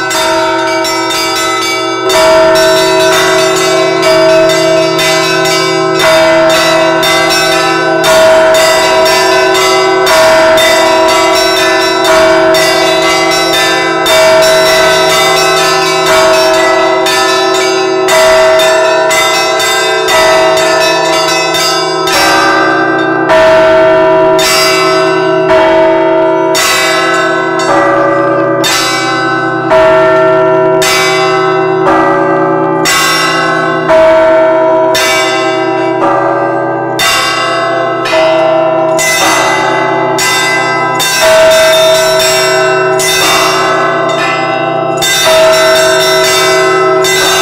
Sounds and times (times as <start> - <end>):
Bell: 0.0 - 47.4.